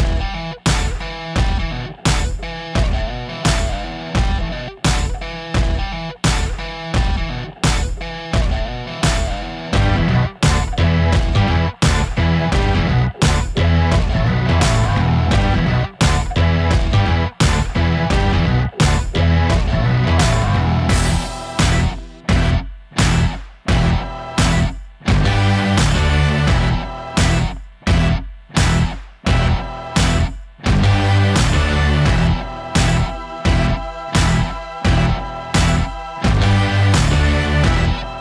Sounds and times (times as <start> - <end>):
Music: 0.0 - 38.2.